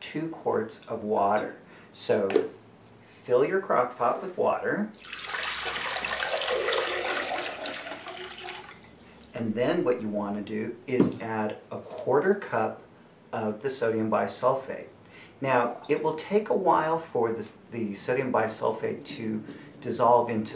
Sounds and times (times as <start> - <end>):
Speech: 0.0 - 2.5, 3.1 - 4.9, 9.4 - 20.5
Inside, small room: 0.0 - 20.5.